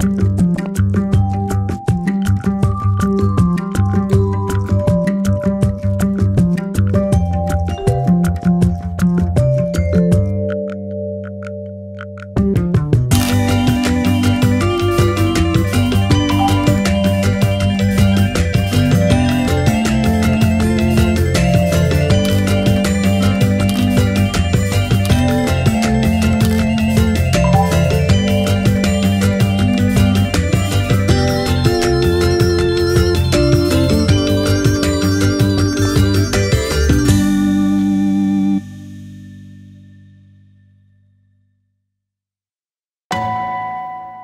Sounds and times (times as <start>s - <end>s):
Music: 0.0s - 41.1s, 43.1s - 44.2s.